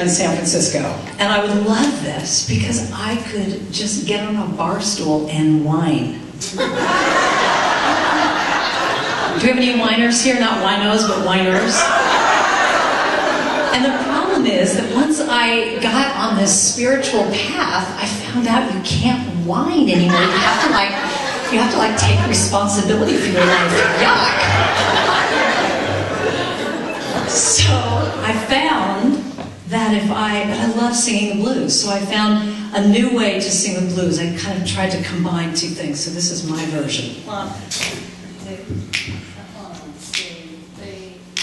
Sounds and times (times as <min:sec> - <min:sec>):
Speech: 0:00.0 - 0:06.2, 0:09.4 - 0:11.8, 0:13.7 - 0:24.6, 0:27.3 - 0:38.8, 0:39.4 - 0:41.4.